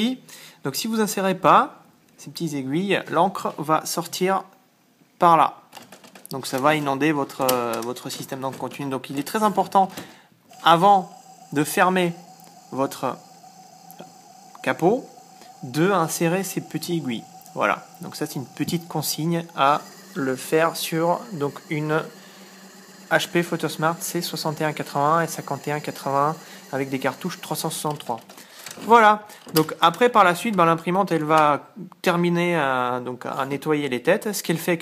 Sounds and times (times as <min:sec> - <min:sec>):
Speech: 0:00.0 - 0:04.6, 0:05.2 - 0:05.6, 0:06.3 - 0:10.0, 0:10.6 - 0:13.2, 0:14.6 - 0:22.2, 0:23.1 - 0:34.8.